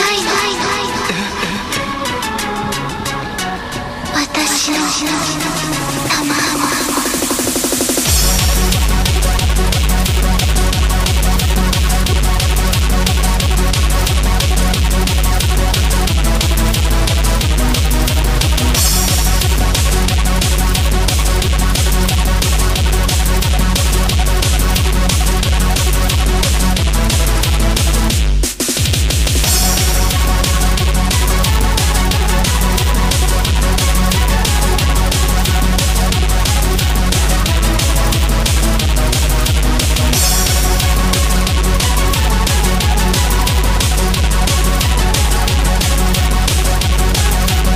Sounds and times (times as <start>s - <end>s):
Music: 0.0s - 47.7s.